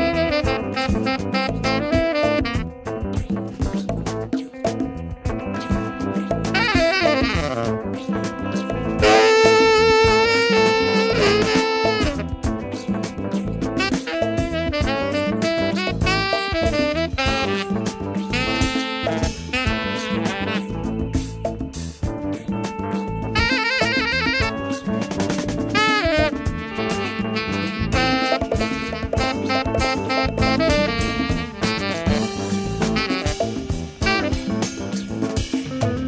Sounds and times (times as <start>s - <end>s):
Brass instrument: 0.0s - 3.6s, 5.4s - 21.8s, 23.2s - 36.0s
Saxophone: 0.0s - 3.9s, 5.3s - 36.0s.